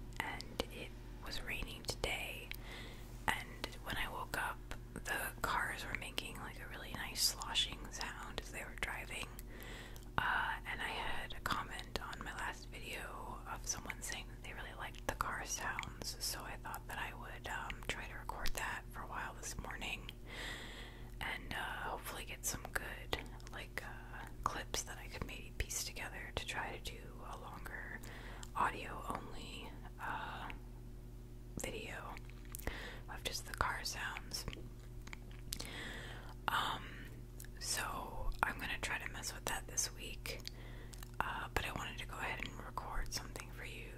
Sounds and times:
Whispering: 0.2 - 2.6, 3.3 - 9.4, 10.2 - 20.1, 21.2 - 30.6, 31.6 - 32.2, 33.1 - 34.6, 36.5 - 40.4, 41.2 - 43.9.

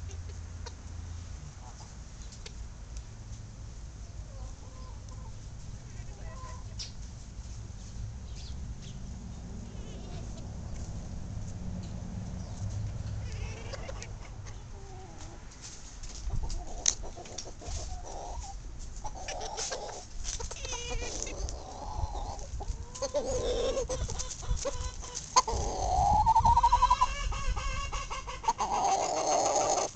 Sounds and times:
Livestock, farm animals, working animals: 0.0 - 29.9.

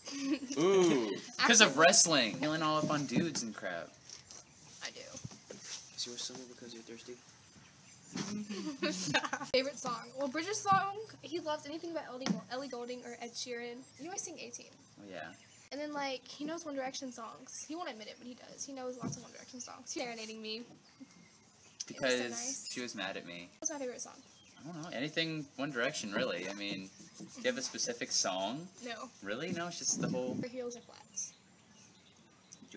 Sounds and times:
Outside, urban or manmade: 0.0 - 32.7.

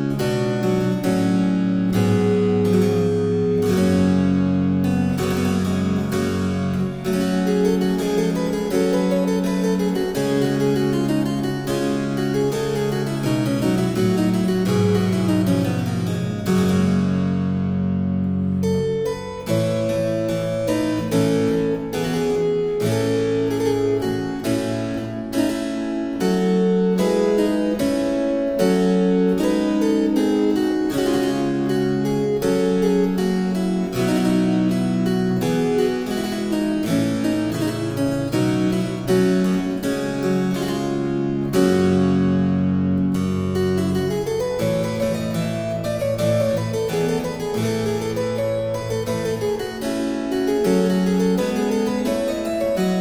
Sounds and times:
Harpsichord: 0.0 - 53.0.

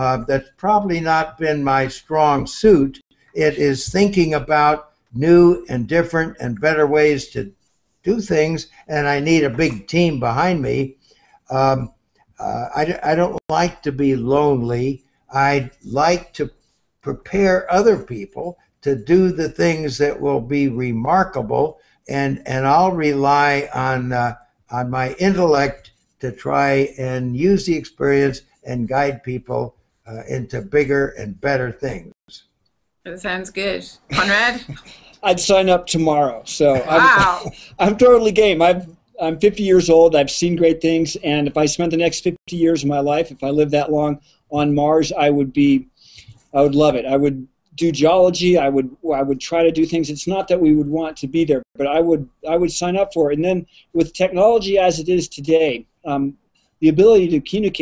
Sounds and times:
Speech: 0.0 - 7.5, 8.1 - 10.9, 11.5 - 16.5, 17.1 - 32.4, 33.1 - 57.8.

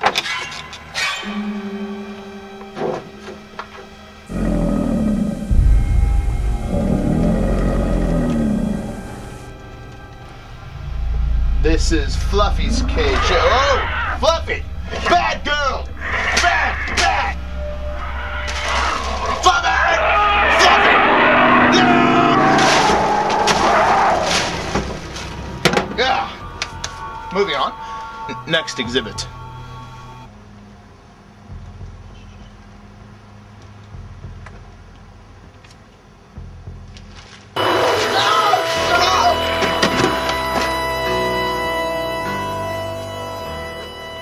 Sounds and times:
Music: 0.0 - 44.2
Speech: 11.6 - 17.4, 27.3 - 29.3.

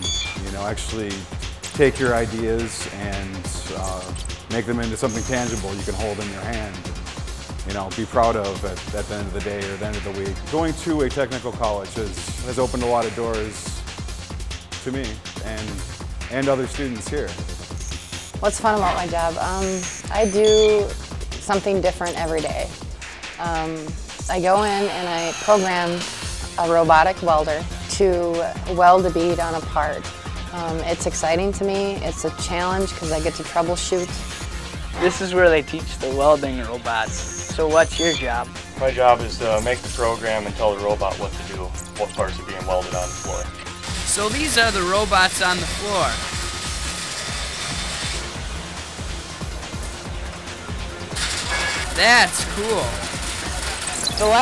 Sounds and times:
Music: 0.0 - 54.4.

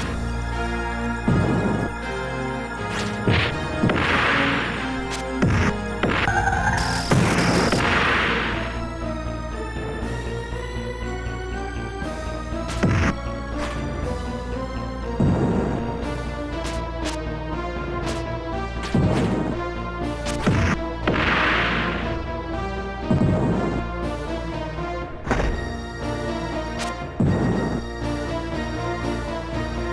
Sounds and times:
Music: 0.0 - 29.9.

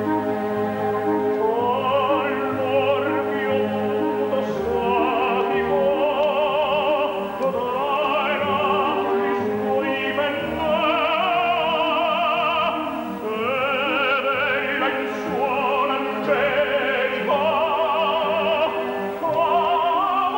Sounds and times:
Opera: 0.0 - 20.3
Orchestra: 0.0 - 20.3.

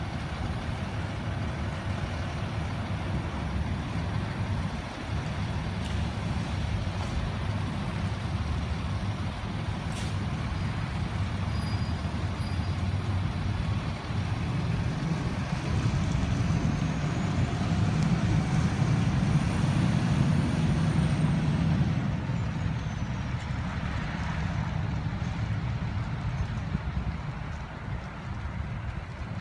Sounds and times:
Vehicle: 0.0 - 29.4.

